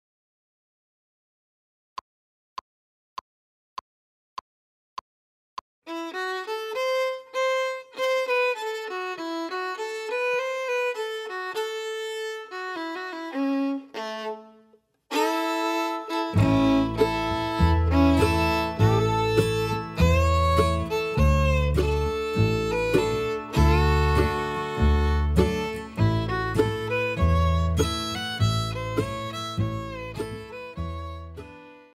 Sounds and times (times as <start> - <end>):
Violin, fiddle: 5.9 - 31.9.